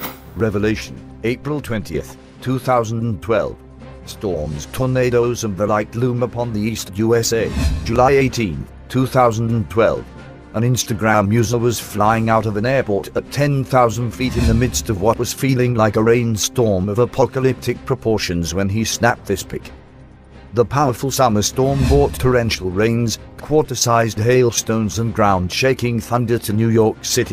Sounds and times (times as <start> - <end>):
Music: 0.0 - 27.3
Speech: 0.4 - 19.7, 20.5 - 27.3.